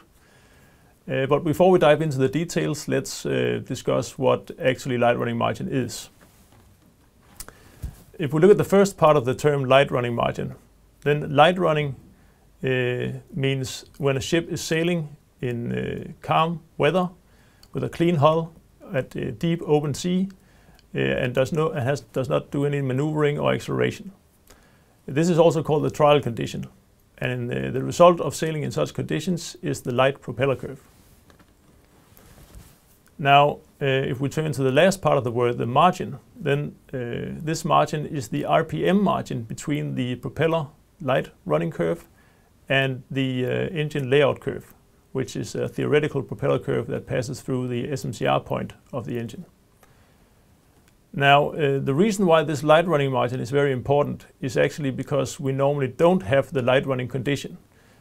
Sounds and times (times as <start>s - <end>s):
Speech: 1.1s - 6.2s, 8.1s - 12.0s, 12.6s - 24.2s, 25.1s - 30.9s, 33.2s - 42.1s, 42.7s - 49.5s, 51.1s - 57.6s.